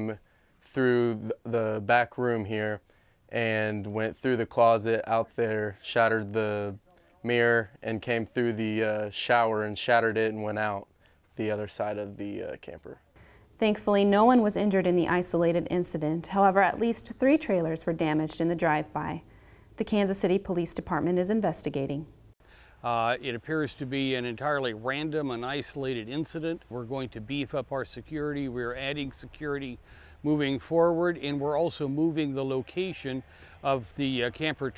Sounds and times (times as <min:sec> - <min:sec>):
Speech: 0:00.0 - 0:02.8, 0:03.4 - 0:13.0, 0:13.6 - 0:19.2, 0:19.8 - 0:22.1, 0:22.8 - 0:34.7.